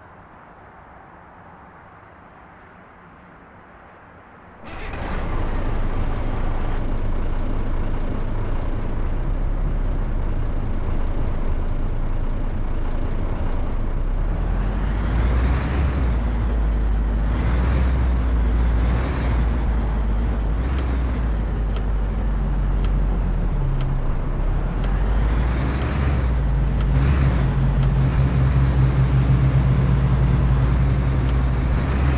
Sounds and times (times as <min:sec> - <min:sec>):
Vehicle: 0:00.0 - 0:32.1.